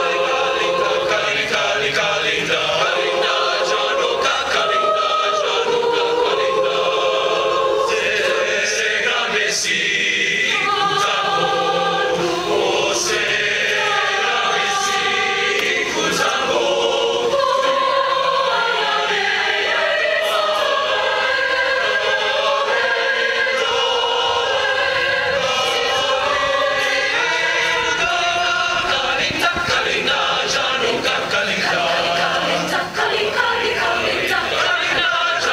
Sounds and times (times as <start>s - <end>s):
Male singing: 25.4s - 33.0s.